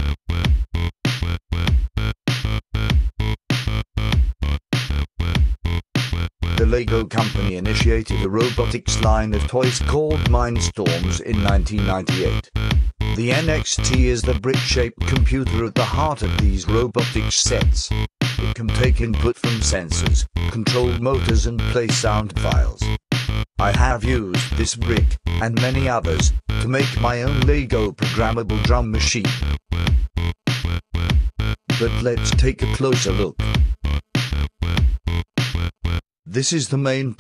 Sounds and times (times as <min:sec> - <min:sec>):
Drum machine: 0:00.3 - 0:02.2, 0:02.8 - 0:04.4, 0:05.2 - 0:05.8, 0:06.4 - 0:35.8
Speech: 0:06.6 - 0:12.5, 0:13.2 - 0:22.9, 0:23.6 - 0:29.4, 0:31.8 - 0:33.4, 0:36.3 - 0:37.2.